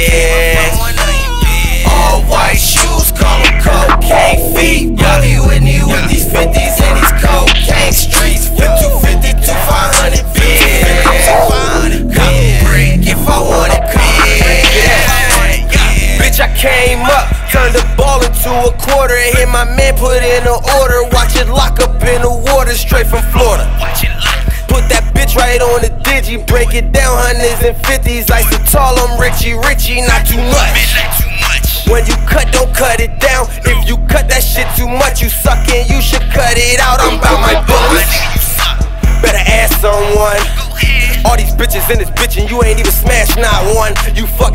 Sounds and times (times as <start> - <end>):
Music: 0.0 - 44.5.